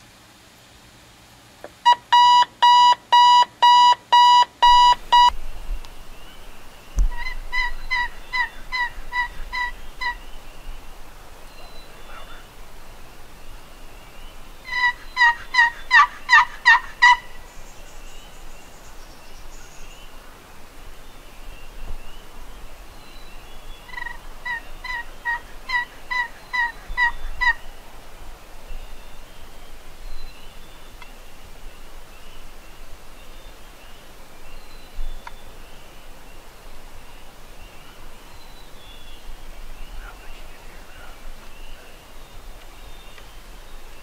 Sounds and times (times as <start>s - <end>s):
Bird: 11.4s - 12.5s, 37.6s - 44.0s.